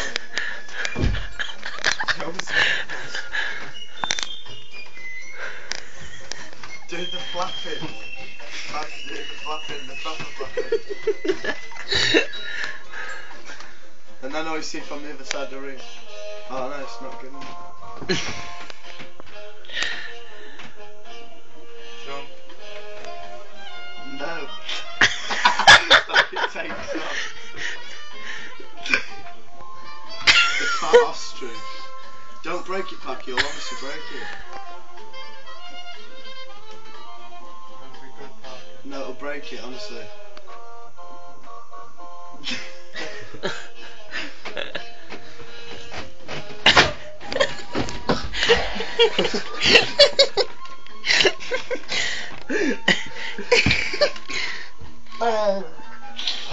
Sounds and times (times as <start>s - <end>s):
Music: 0.0s - 56.5s.